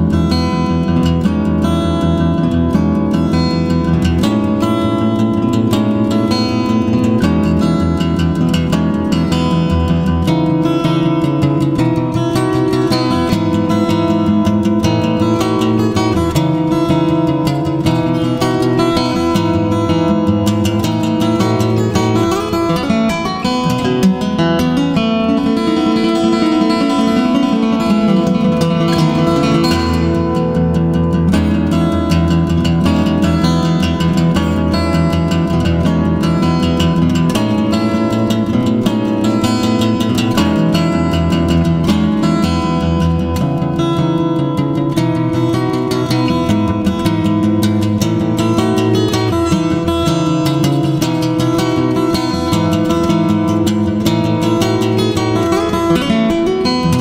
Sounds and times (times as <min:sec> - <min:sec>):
Acoustic guitar: 0:00.0 - 0:57.0.